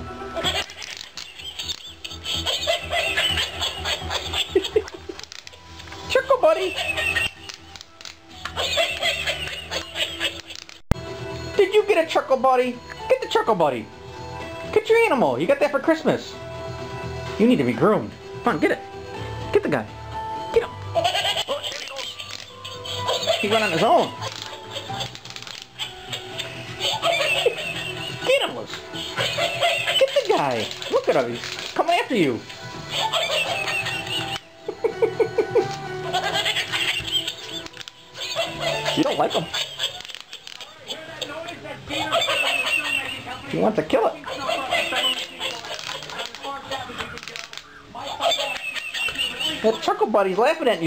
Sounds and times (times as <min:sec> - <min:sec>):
Music: 0:00.0 - 0:50.8
Chuckle, chortle: 0:00.4 - 0:05.6, 0:32.9 - 0:40.8, 0:48.1 - 0:49.6.